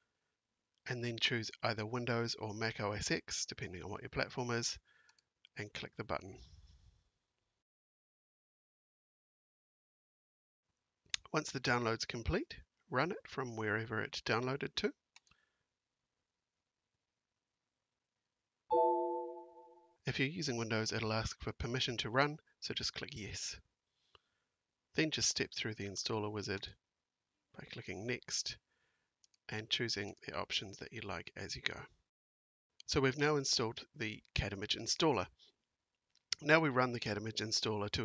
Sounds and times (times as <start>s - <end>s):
Speech: 0.8s - 4.8s, 5.5s - 6.4s, 11.2s - 15.0s, 20.1s - 23.7s, 25.0s - 26.8s, 27.5s - 28.6s, 29.5s - 32.0s, 32.8s - 35.4s, 36.3s - 38.0s.